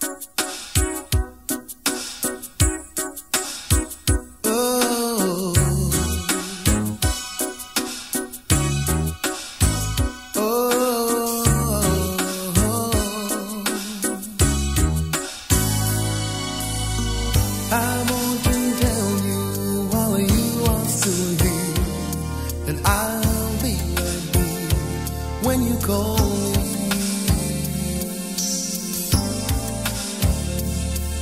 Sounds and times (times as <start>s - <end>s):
Soul music: 0.0s - 31.2s.